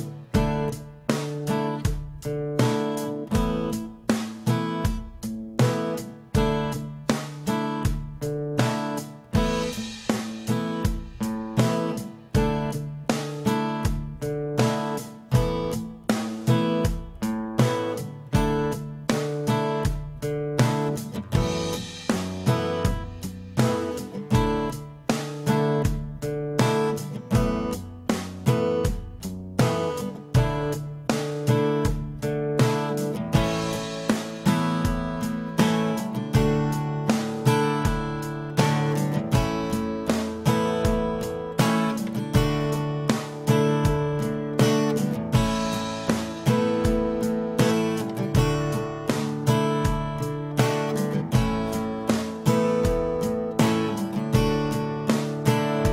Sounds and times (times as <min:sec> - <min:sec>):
Electric guitar: 0:00.0 - 0:55.9
Strum: 0:00.0 - 0:55.9.